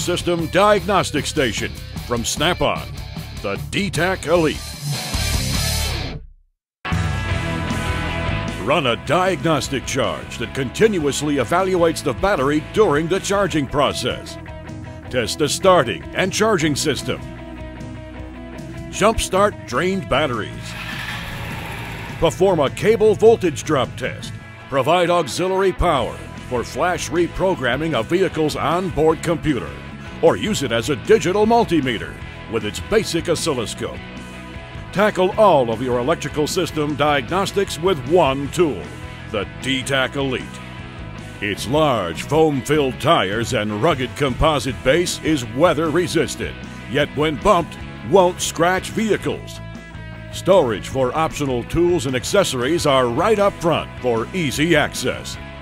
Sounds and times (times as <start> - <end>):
Speech: 0.0 - 4.6, 8.6 - 14.4, 15.1 - 17.2, 18.9 - 20.8, 22.2 - 34.0, 34.9 - 40.6, 41.4 - 49.6, 50.3 - 55.4
Music: 0.0 - 55.6.